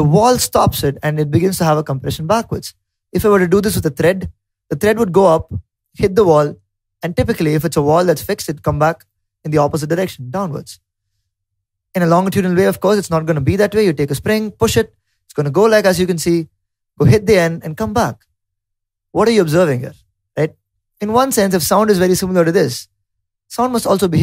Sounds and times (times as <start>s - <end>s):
Speech: 0.0s - 10.8s, 12.0s - 18.2s, 19.2s - 22.9s, 23.5s - 24.2s.